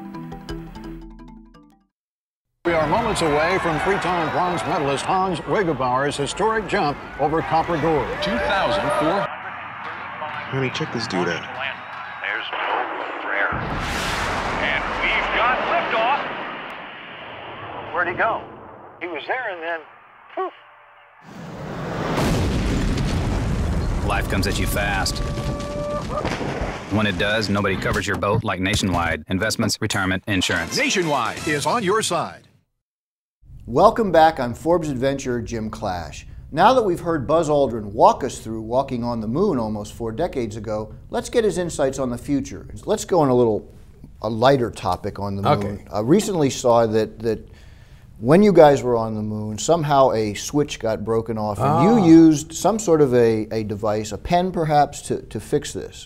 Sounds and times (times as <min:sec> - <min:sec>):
Speech: 0:02.7 - 0:09.3, 0:19.0 - 0:20.5, 0:26.9 - 0:32.4, 0:33.7 - 0:47.5, 0:48.2 - 0:56.0.